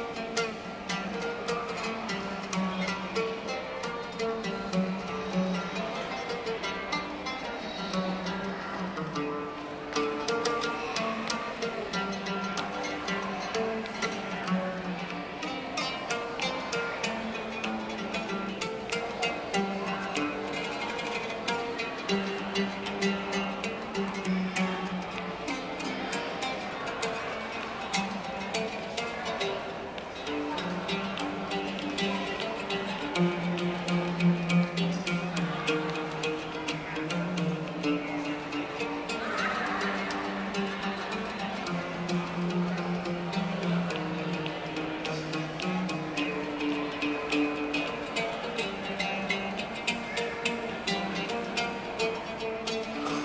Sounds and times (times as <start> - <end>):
Middle Eastern music: 0.0 - 53.2.